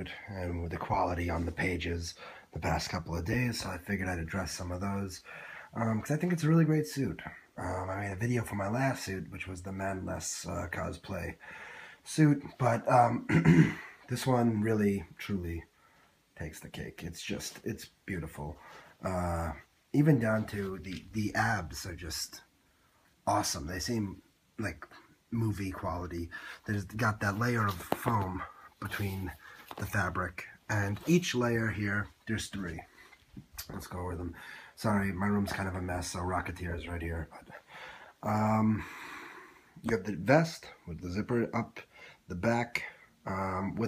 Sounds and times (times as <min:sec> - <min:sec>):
Speech: 0:00.0 - 0:11.4, 0:12.0 - 0:15.7, 0:16.4 - 0:22.5, 0:23.2 - 0:32.9, 0:33.5 - 0:37.6, 0:38.2 - 0:38.9, 0:39.8 - 0:43.8.